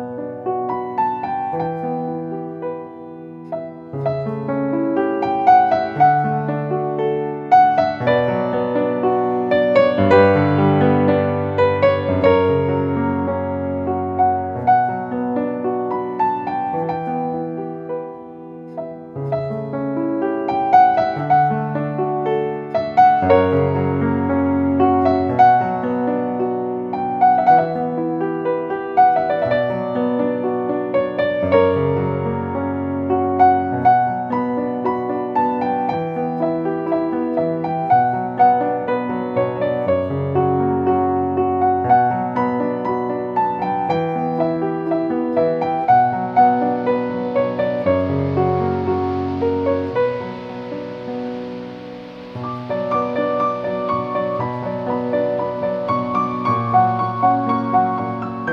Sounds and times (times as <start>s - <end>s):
Music: 0.0s - 58.5s.